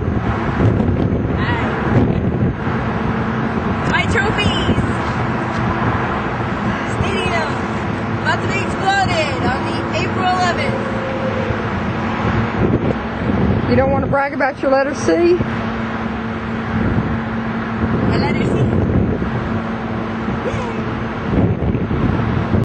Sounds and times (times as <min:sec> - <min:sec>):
Speech: 0:18.1 - 0:18.7.